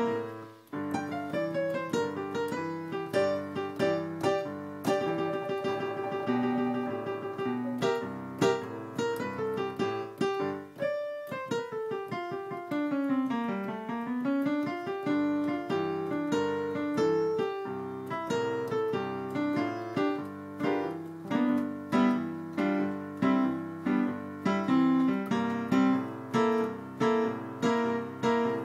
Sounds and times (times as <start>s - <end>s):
Electric piano: 0.0s - 28.6s.